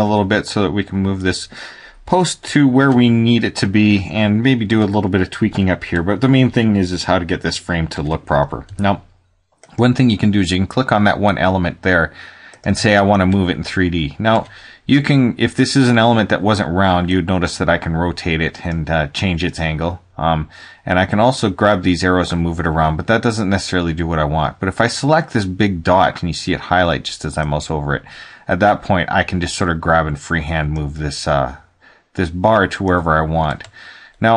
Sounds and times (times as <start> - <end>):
Speech: 0.0 - 1.5, 2.1 - 9.1, 9.7 - 34.3.